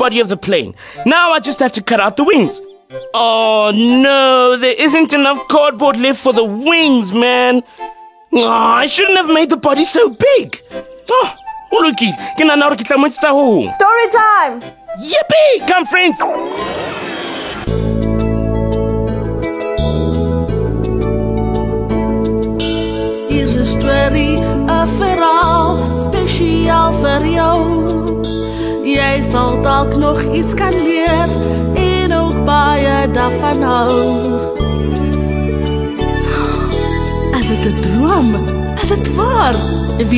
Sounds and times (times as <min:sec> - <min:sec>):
Music for children: 0:00.0 - 0:40.1.